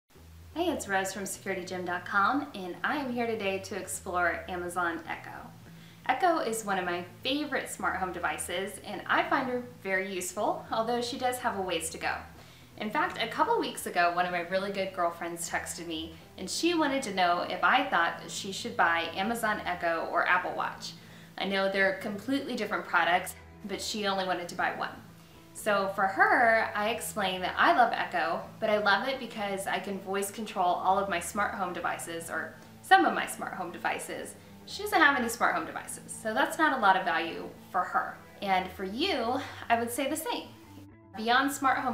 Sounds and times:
Music: 0.1s - 41.9s
Speech: 0.6s - 5.5s, 6.1s - 25.0s, 25.6s - 40.6s, 41.2s - 41.9s.

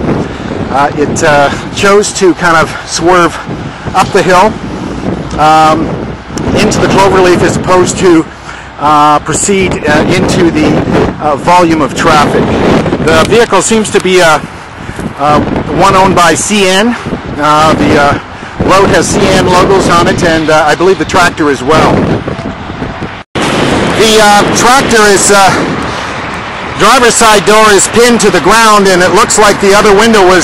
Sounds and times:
Speech: 0.7s - 3.4s, 4.0s - 4.6s, 5.4s - 5.8s, 6.5s - 12.4s, 13.0s - 14.4s, 15.2s - 22.0s, 24.0s - 25.6s, 26.8s - 30.4s.

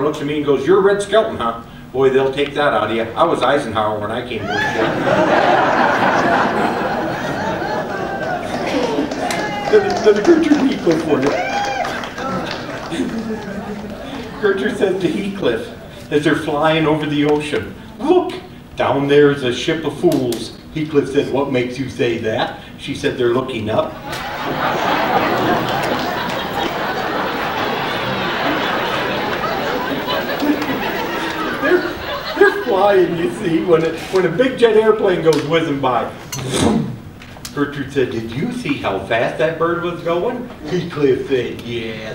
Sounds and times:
Speech: 0.0s - 4.9s, 8.2s - 11.4s, 14.1s - 24.0s, 30.2s - 42.1s.

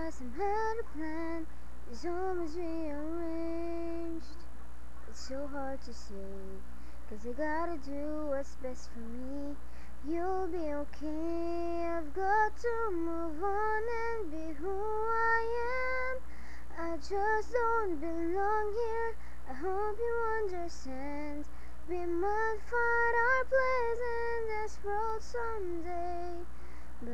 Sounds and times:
Child singing: 0.0s - 4.4s, 5.1s - 27.1s
Female singing: 0.0s - 4.4s, 5.1s - 27.1s.

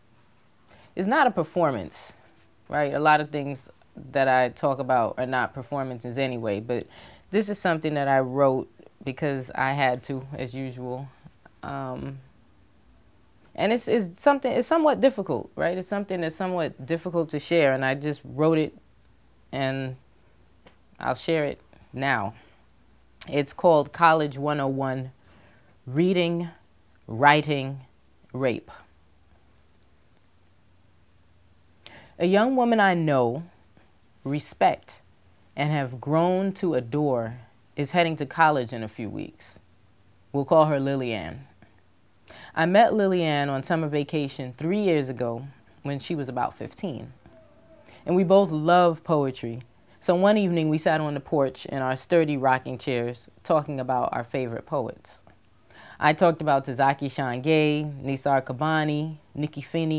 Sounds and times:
Speech: 1.0s - 12.3s, 13.6s - 18.8s, 19.5s - 20.0s, 21.0s - 22.4s, 23.2s - 25.2s, 25.9s - 28.9s, 32.2s - 33.6s, 34.2s - 35.0s, 35.6s - 39.6s, 40.3s - 41.6s, 42.6s - 47.2s, 48.0s - 55.3s, 56.0s - 59.9s.

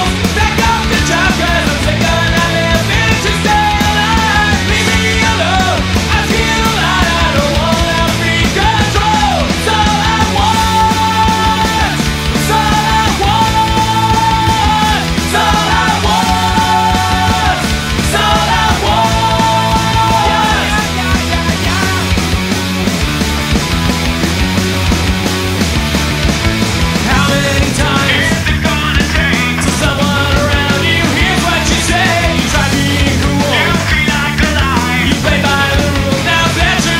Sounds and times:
Music: 0.0s - 37.0s.

